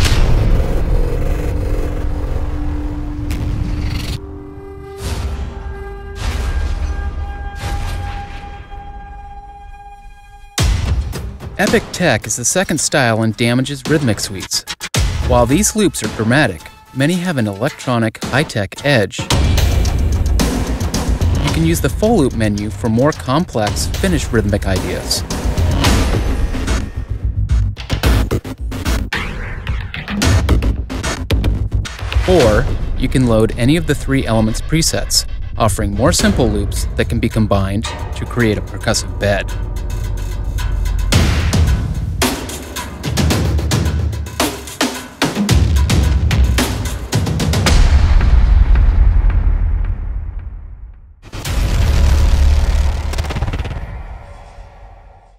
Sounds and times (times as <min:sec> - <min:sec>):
Music: 0:00.0 - 0:53.8
Speech: 0:11.6 - 0:19.3, 0:21.4 - 0:25.2, 0:32.2 - 0:39.5.